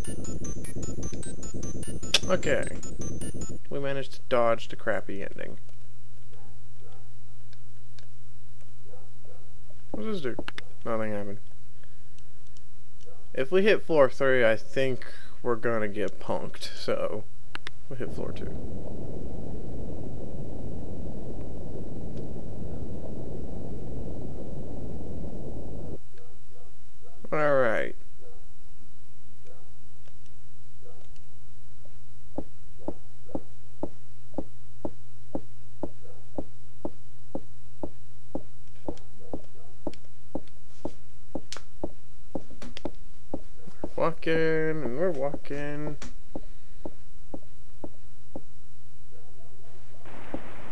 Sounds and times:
Speech: 0:02.2 - 0:02.8, 0:03.7 - 0:05.6, 0:10.0 - 0:11.4, 0:13.4 - 0:17.2, 0:17.9 - 0:18.6, 0:27.3 - 0:28.0, 0:43.9 - 0:46.0.

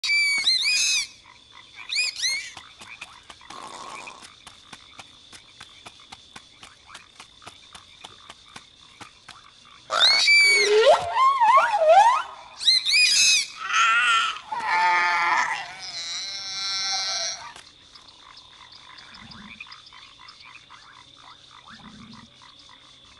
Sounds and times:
Frog: 0:00.0 - 0:05.0, 0:06.6 - 0:23.1.

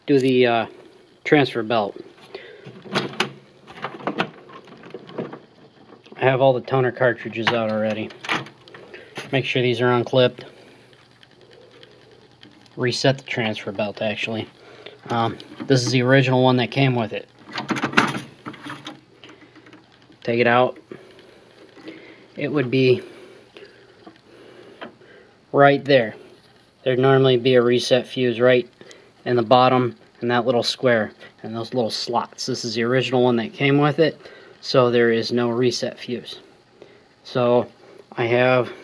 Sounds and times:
Speech: 0:00.0 - 0:02.0, 0:06.2 - 0:08.2, 0:09.2 - 0:10.6, 0:12.8 - 0:14.5, 0:15.1 - 0:17.3, 0:20.2 - 0:20.8, 0:22.4 - 0:23.1, 0:25.5 - 0:26.2, 0:26.8 - 0:36.5, 0:37.2 - 0:38.8.

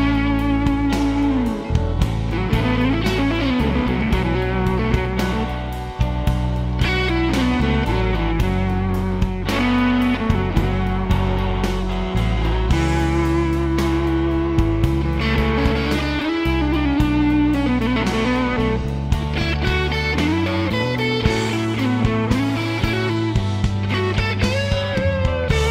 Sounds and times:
Music: 0:00.0 - 0:25.7.

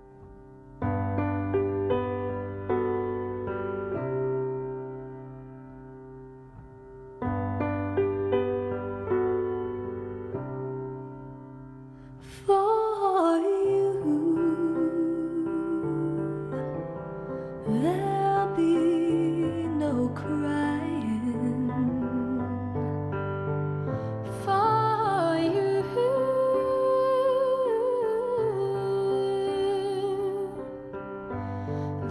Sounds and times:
Music: 0:00.0 - 0:32.1.

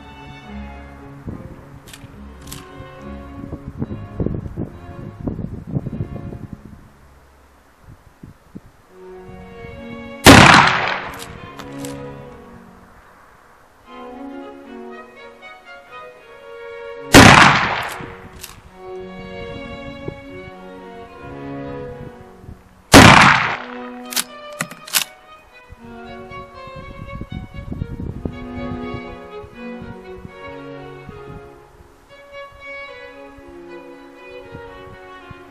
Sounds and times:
Gunshot, gunfire: 0:10.3 - 0:11.2, 0:17.2 - 0:18.1, 0:23.0 - 0:23.8.

